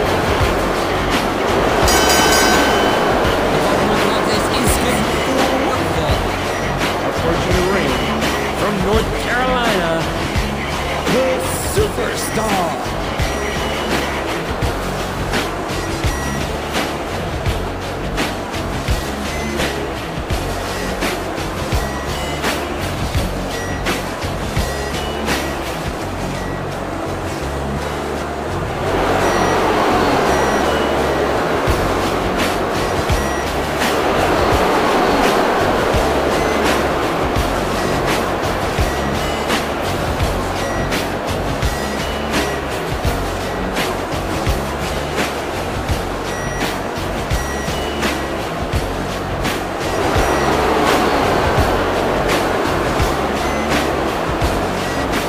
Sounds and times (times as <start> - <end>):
Music: 0.0 - 55.2.